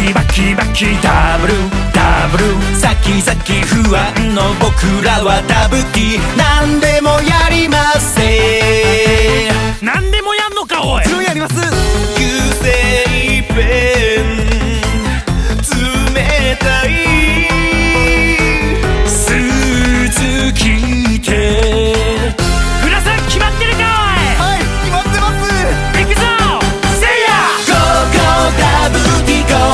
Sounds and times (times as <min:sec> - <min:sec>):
Music: 0:00.0 - 0:29.7
Speech: 0:09.8 - 0:11.8, 0:22.8 - 0:27.1.